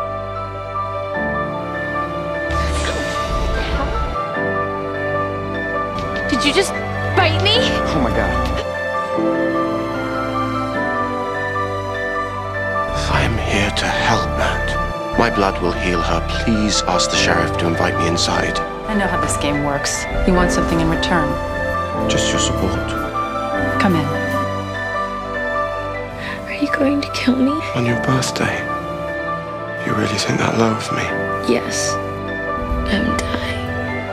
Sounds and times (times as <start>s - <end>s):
Background music: 0.0s - 34.1s.